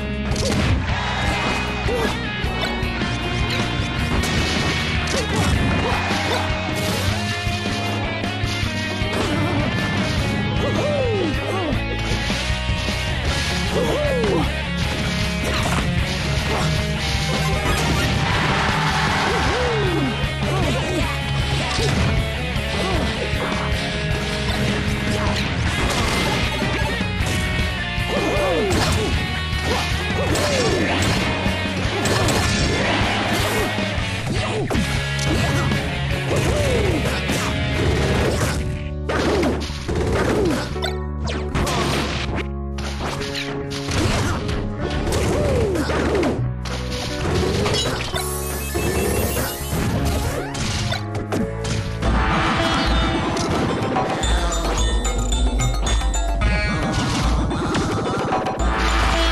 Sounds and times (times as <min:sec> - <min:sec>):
Theme music: 0:00.0 - 0:36.4, 0:46.4 - 0:57.7, 0:58.3 - 0:59.3.